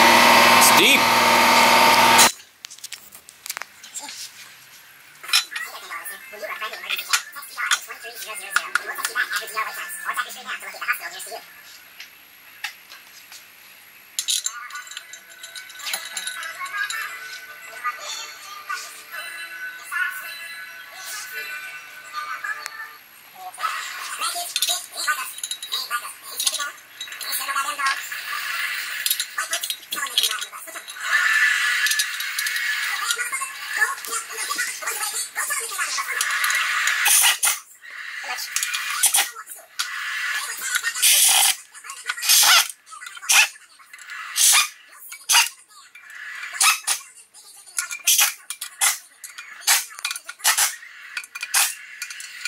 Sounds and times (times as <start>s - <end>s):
Speech: 0.6s - 1.1s, 5.6s - 11.5s, 22.4s - 28.1s, 29.4s - 30.9s, 32.9s - 36.3s, 40.4s - 43.9s, 46.6s - 50.3s.